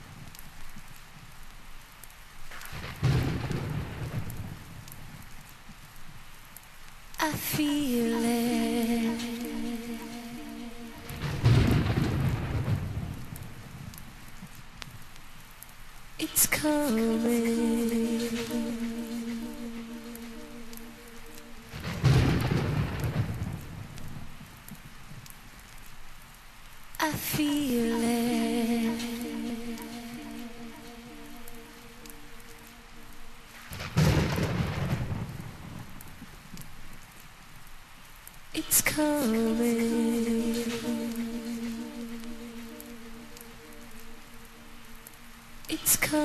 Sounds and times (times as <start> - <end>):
Rain on surface: 0.0 - 46.2
Raindrop: 0.0 - 46.2
Thunder: 2.6 - 5.2, 11.0 - 14.0, 21.7 - 24.4, 33.6 - 36.4.